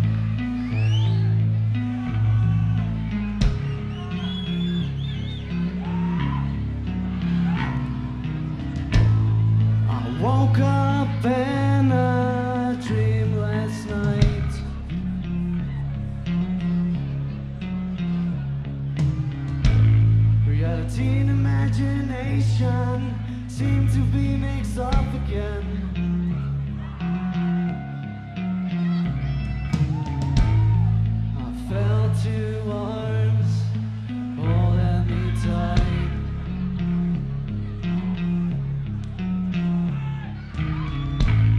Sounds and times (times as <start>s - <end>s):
Music: 0.0s - 41.5s
Speech: 9.9s - 15.7s, 34.4s - 37.3s.